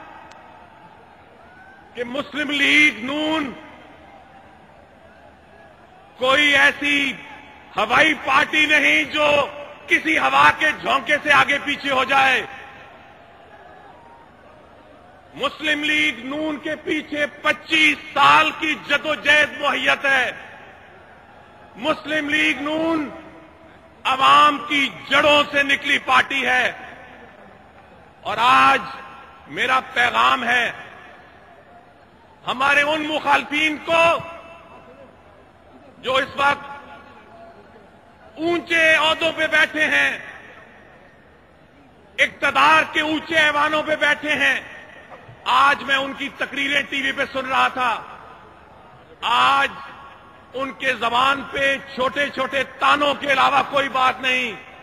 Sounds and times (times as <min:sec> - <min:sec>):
Narration, monologue: 0:00.0 - 0:13.5, 0:15.2 - 0:54.8
Male speech, man speaking: 0:02.0 - 0:03.7, 0:06.2 - 0:12.7, 0:15.4 - 0:20.5, 0:21.8 - 0:23.3, 0:24.0 - 0:26.9, 0:28.2 - 0:30.9, 0:32.4 - 0:35.1, 0:35.9 - 0:40.6, 0:42.2 - 0:44.8, 0:45.4 - 0:48.2, 0:49.2 - 0:54.7.